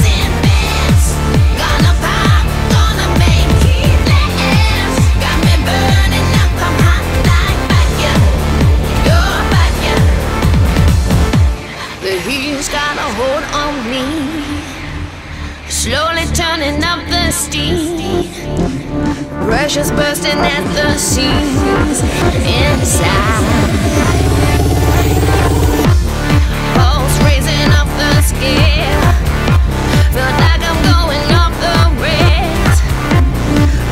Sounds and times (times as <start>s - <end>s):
Singing: 0.0s - 10.6s, 11.3s - 33.9s
Music: 0.0s - 33.9s.